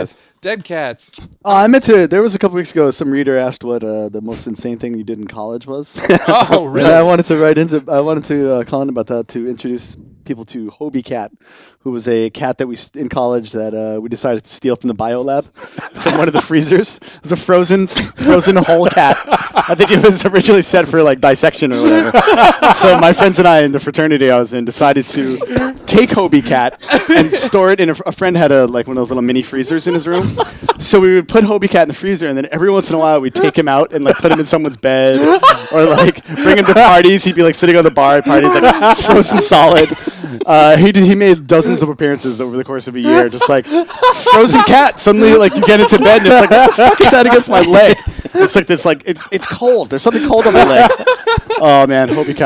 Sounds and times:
Speech: 0.0 - 52.4.

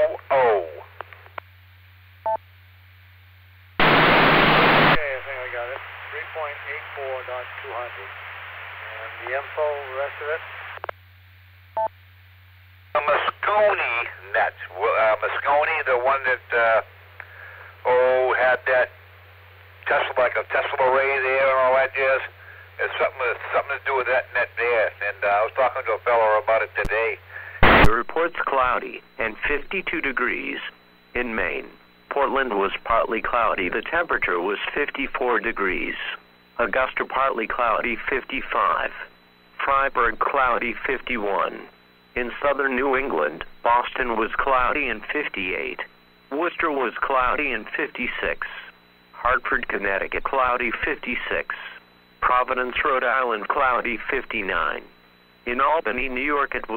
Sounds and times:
Speech: 0.0 - 0.9, 5.0 - 8.2, 8.8 - 10.5, 13.0 - 16.9, 17.8 - 19.0, 19.8 - 56.7
Radio: 0.0 - 1.5, 3.8 - 11.0, 12.9 - 19.1, 19.8 - 56.7.

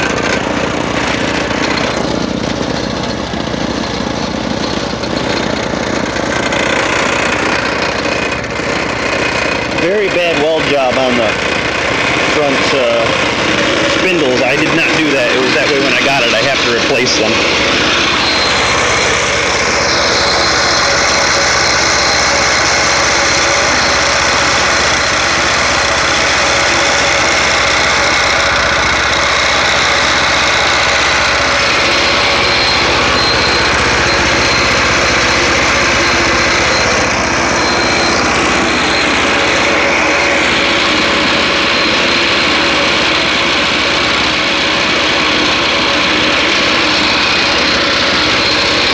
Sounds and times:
Idling: 0.0 - 48.9
Vehicle: 0.0 - 48.9
Speech: 9.8 - 11.4, 12.3 - 13.2, 14.0 - 17.4.

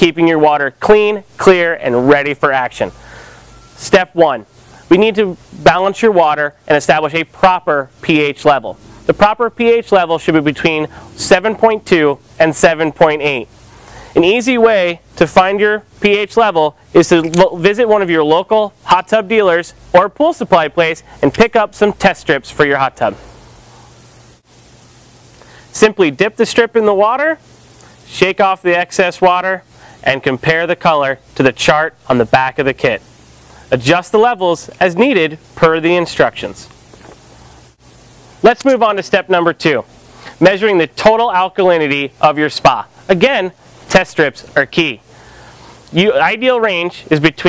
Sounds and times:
Speech: 0.0 - 3.0, 3.8 - 13.5, 14.2 - 23.2, 25.7 - 27.4, 28.1 - 33.0, 33.7 - 36.7, 38.4 - 45.0, 45.9 - 47.4.

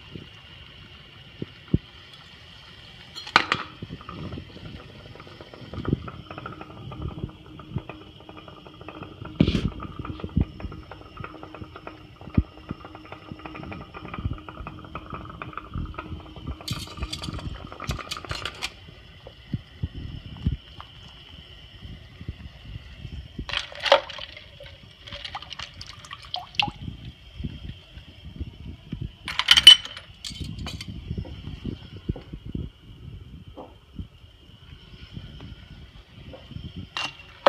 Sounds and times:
Water: 0.0 - 31.4.

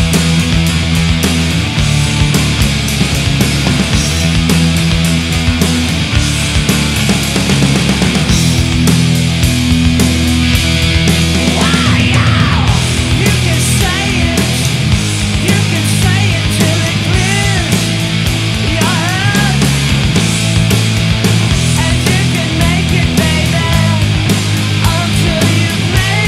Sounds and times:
Music: 0.0 - 26.2.

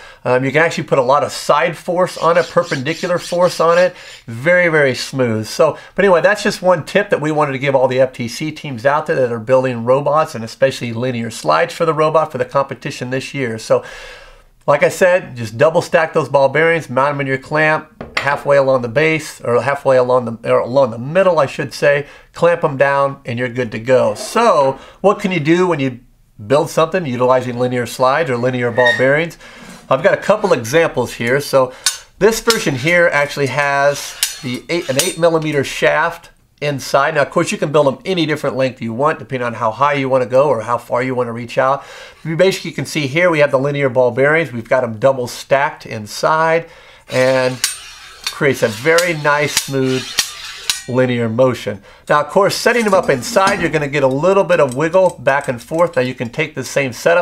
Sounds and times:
Speech: 0.2 - 13.9, 14.6 - 47.7, 48.3 - 50.2, 50.9 - 57.2.

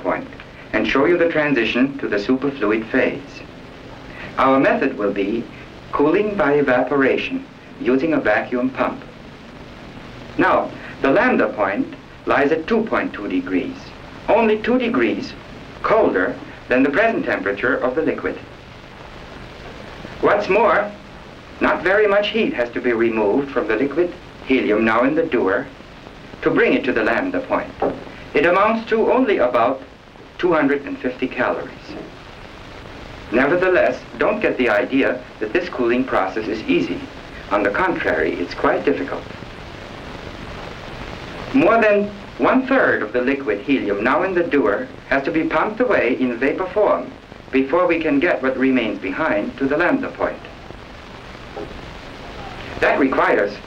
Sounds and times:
Speech: 0.0 - 3.5, 4.2 - 9.1, 10.4 - 18.5, 20.2 - 21.0, 21.6 - 25.8, 26.4 - 32.2, 33.3 - 39.3, 41.5 - 50.5, 52.4 - 53.6.

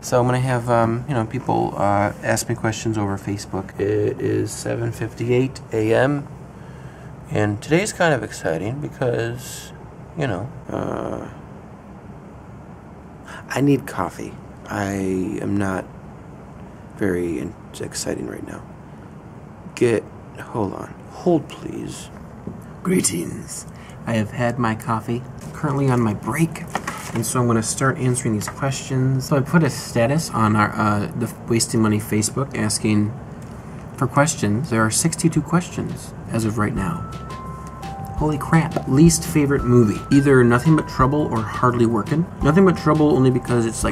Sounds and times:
Speech: 0.0 - 6.3, 7.3 - 11.4, 13.3 - 15.9, 17.0 - 18.7, 19.7 - 22.2, 22.8 - 33.2, 34.0 - 37.0, 38.2 - 43.9.

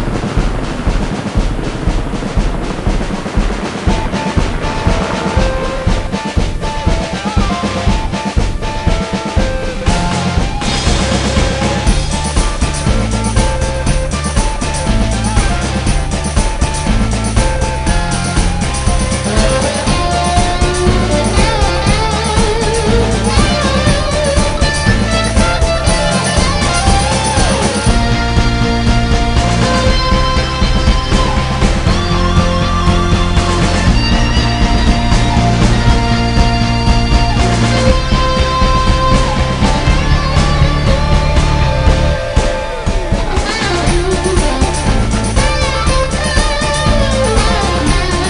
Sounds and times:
Background music: 0.0 - 48.2
Exciting music: 0.0 - 48.2
Theme music: 0.0 - 48.2.

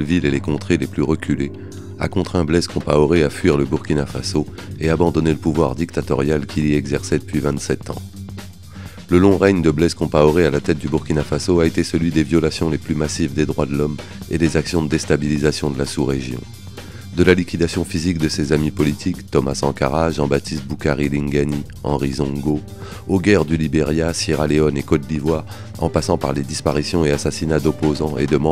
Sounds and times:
Speech: 0.0 - 8.1, 9.1 - 16.5, 17.2 - 28.5
Music: 0.0 - 28.5.

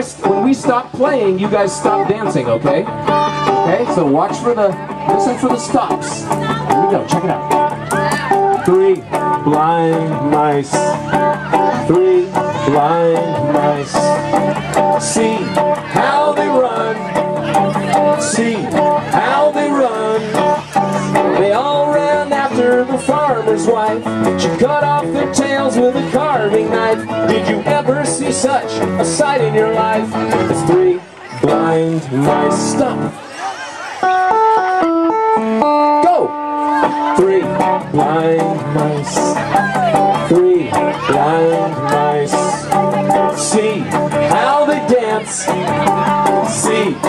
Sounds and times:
Music: 0.0 - 33.2, 33.8 - 47.0
Speech: 0.0 - 34.1, 36.0 - 47.0.

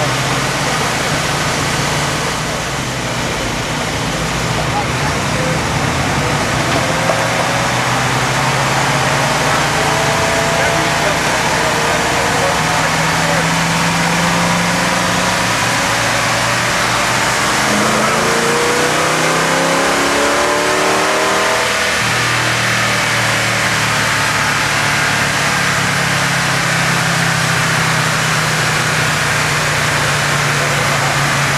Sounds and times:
Speech: 4.6 - 6.8, 9.8 - 13.6, 29.8 - 31.5.

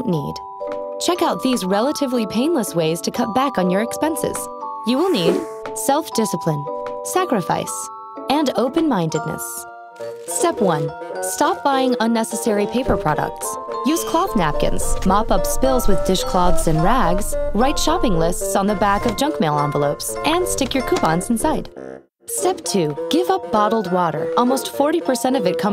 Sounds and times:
Speech: 0.0 - 0.4, 1.0 - 9.6, 10.3 - 21.7, 22.3 - 25.7
Music: 0.0 - 25.7.

